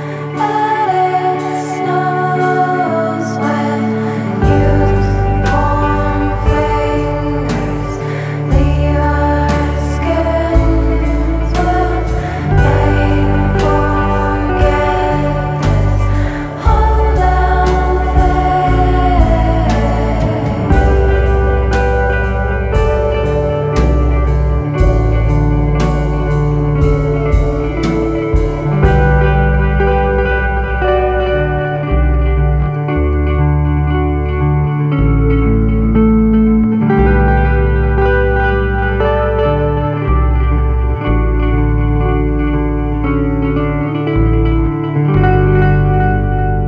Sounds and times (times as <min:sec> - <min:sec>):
Music: 0:00.0 - 0:46.6.